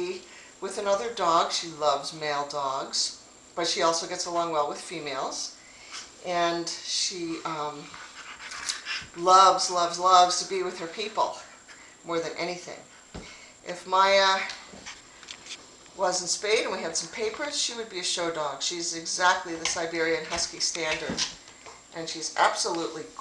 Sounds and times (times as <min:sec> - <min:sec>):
Speech: 0:00.0 - 0:05.6, 0:06.2 - 0:07.9, 0:09.2 - 0:11.5, 0:12.1 - 0:12.9, 0:13.6 - 0:14.6, 0:16.0 - 0:21.3, 0:22.0 - 0:23.2.